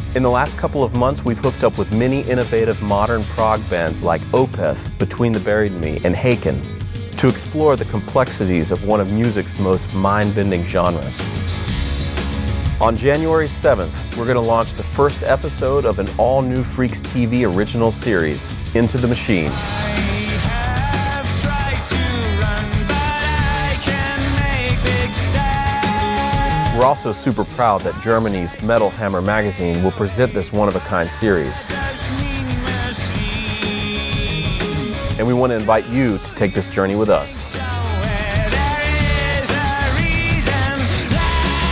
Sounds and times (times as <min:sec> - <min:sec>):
Heavy metal: 0:00.0 - 0:41.7
Progressive rock: 0:00.0 - 0:41.7
Speech: 0:00.1 - 0:11.3, 0:12.8 - 0:19.7, 0:26.6 - 0:33.2, 0:35.1 - 0:37.7.